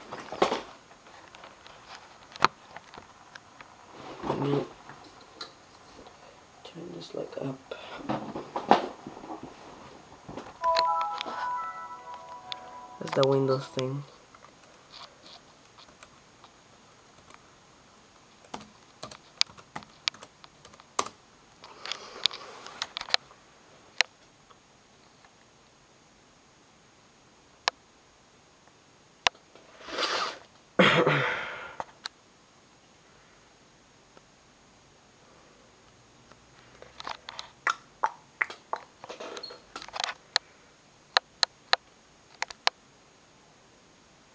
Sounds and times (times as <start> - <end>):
Inside, small room: 0.0 - 44.3
Sniff: 29.7 - 30.5.